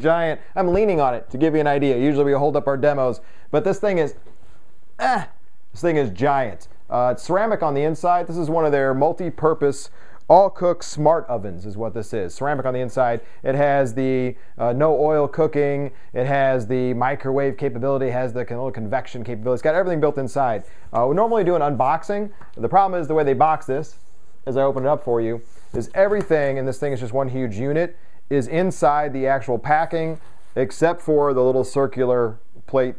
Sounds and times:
Speech: 0.0s - 4.2s, 5.0s - 32.9s.

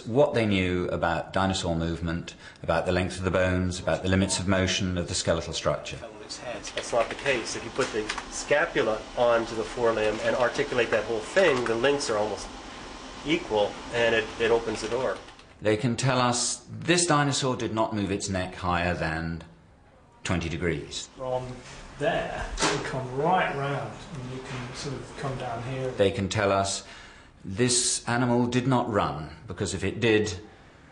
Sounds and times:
Speech: 0.0s - 12.5s, 13.2s - 19.5s, 20.2s - 26.9s, 27.5s - 30.5s
Inside, small room: 0.0s - 30.9s.

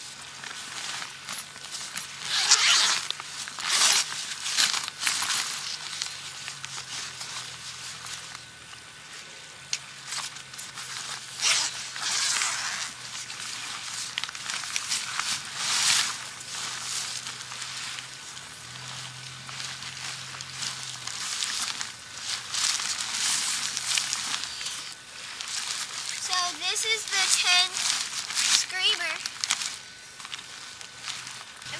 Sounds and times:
Tearing: 1.8s - 6.2s, 11.1s - 18.0s.

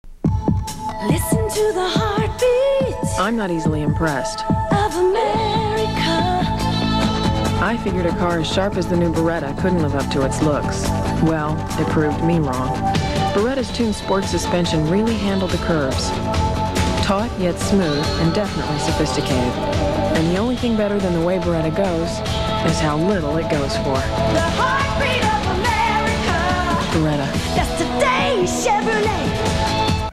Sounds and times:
Music: 0.1s - 30.1s
Speech: 3.1s - 4.4s, 7.6s - 12.8s, 13.4s - 16.2s, 17.0s - 24.1s, 26.8s - 27.4s.

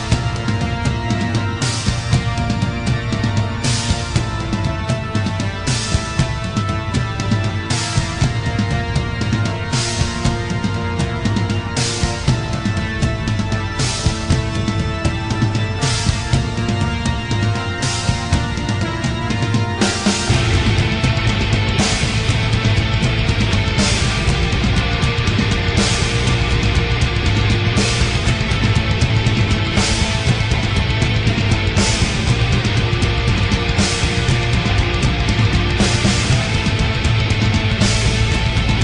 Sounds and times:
Music: 0.0s - 38.8s.

